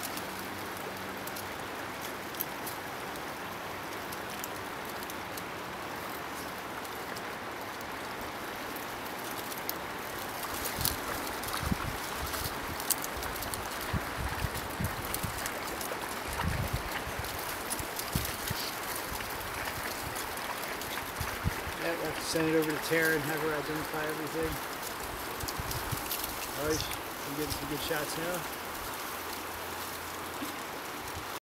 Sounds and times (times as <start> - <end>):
Outside, rural or natural: 0.0 - 31.4
Snake: 0.0 - 31.4
Speech: 21.8 - 24.6, 26.6 - 28.5.